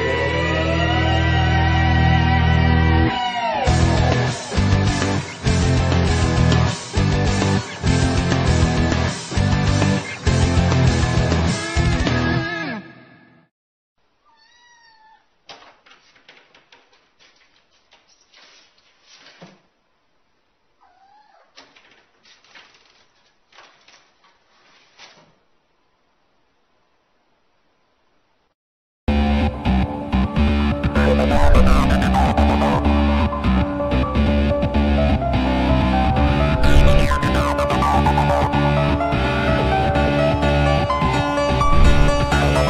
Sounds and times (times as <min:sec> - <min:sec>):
Music: 0:00.0 - 0:13.4, 0:29.1 - 0:42.6.